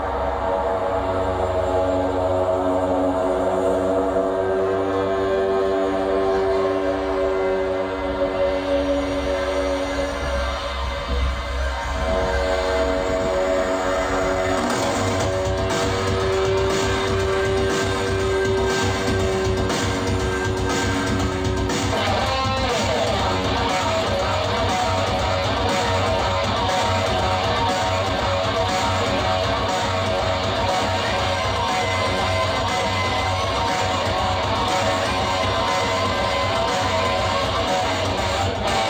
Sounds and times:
Guitar: 0:00.0 - 0:38.9.

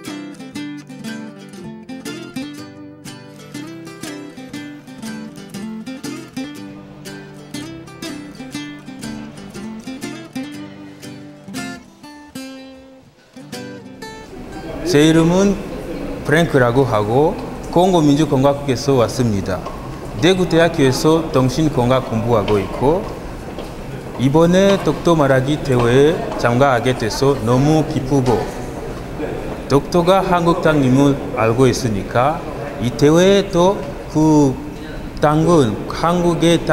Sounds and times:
Male speech, man speaking: 0:14.6 - 0:15.6, 0:16.2 - 0:23.1, 0:24.2 - 0:28.6, 0:29.2 - 0:34.6, 0:35.2 - 0:36.7
Narration, monologue: 0:14.9 - 0:36.7.

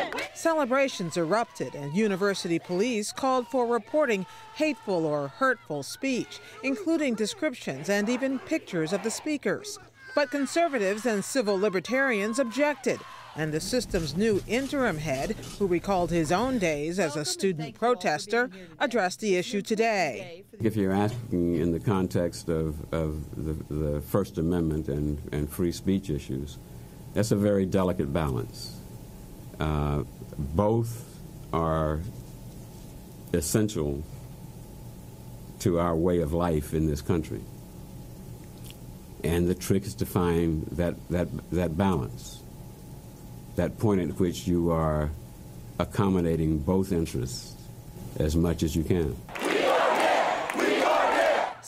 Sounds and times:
Speech: 0:00.6 - 0:26.6, 0:29.6 - 0:32.1, 0:45.8 - 0:47.6.

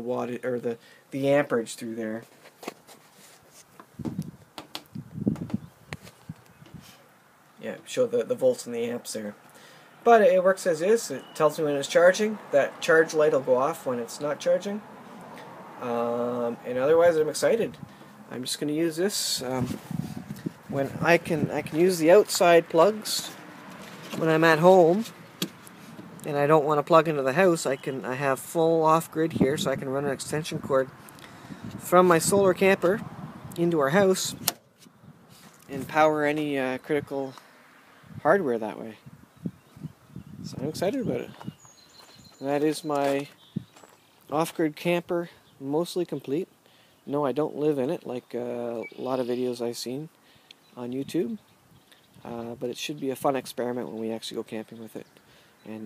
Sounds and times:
Speech: 0:00.0 - 0:02.3, 0:07.6 - 0:09.4, 0:10.1 - 0:14.8, 0:15.8 - 0:19.8, 0:20.7 - 0:23.4, 0:24.2 - 0:25.1, 0:26.3 - 0:30.9, 0:31.8 - 0:33.0, 0:33.6 - 0:34.4, 0:35.7 - 0:37.4, 0:38.2 - 0:39.0, 0:40.5 - 0:41.4, 0:42.4 - 0:43.3, 0:44.3 - 0:46.5, 0:47.1 - 0:50.1, 0:50.8 - 0:51.4, 0:52.2 - 0:55.1.

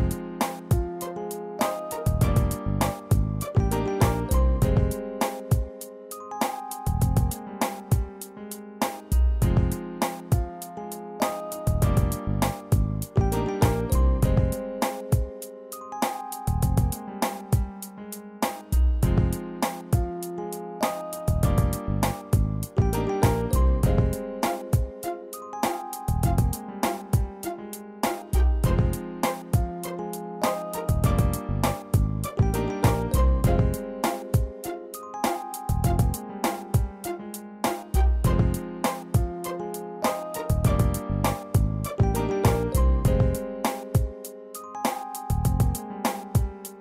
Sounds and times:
Music: 0:00.0 - 0:46.8.

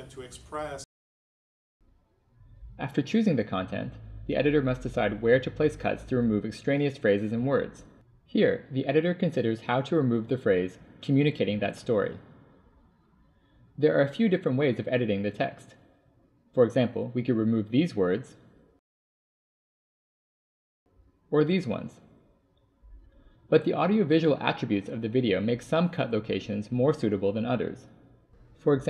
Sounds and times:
Speech: 0:00.0 - 0:00.9, 0:02.8 - 0:12.3, 0:13.8 - 0:15.8, 0:16.6 - 0:18.4, 0:21.3 - 0:22.0, 0:23.5 - 0:28.0, 0:28.6 - 0:28.9.

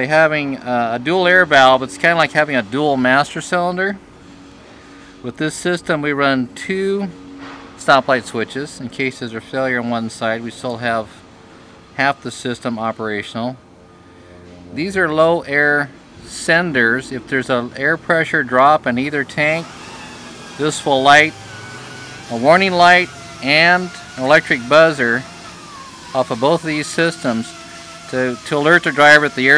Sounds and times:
Speech: 0:00.0 - 0:04.0, 0:05.2 - 0:07.2, 0:07.8 - 0:11.2, 0:12.0 - 0:13.6, 0:14.7 - 0:19.7, 0:20.6 - 0:21.4, 0:22.3 - 0:25.3, 0:26.1 - 0:29.5.

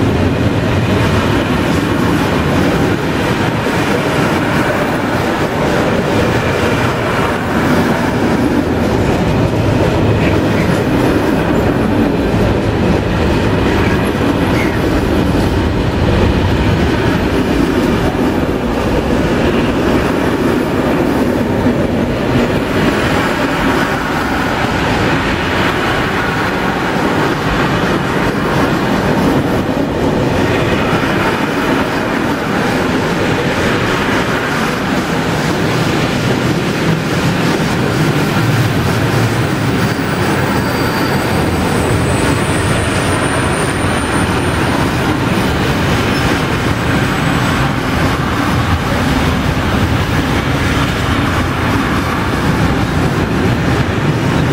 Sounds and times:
Clickety-clack: 0:00.0 - 0:54.5
Railroad car, train wagon: 0:00.0 - 0:54.5
Train: 0:00.0 - 0:54.5.

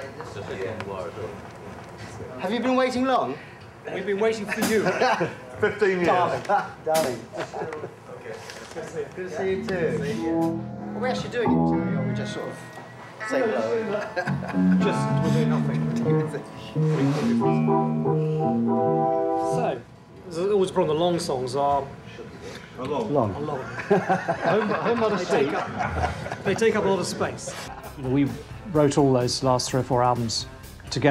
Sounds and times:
Music: 0:09.7 - 0:19.8, 0:27.7 - 0:31.1.

